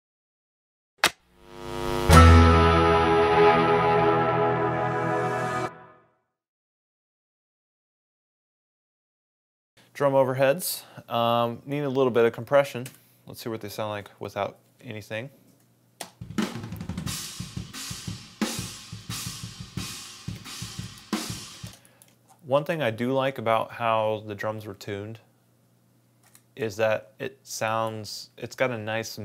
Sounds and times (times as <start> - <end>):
Music: 1.8 - 6.4, 16.2 - 21.8.